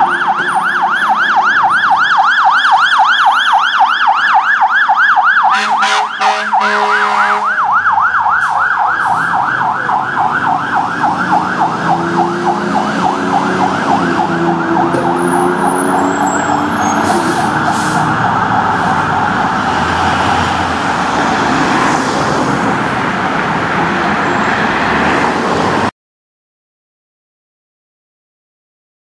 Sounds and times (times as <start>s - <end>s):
Siren: 0.0s - 25.2s
Emergency vehicle: 0.0s - 25.9s.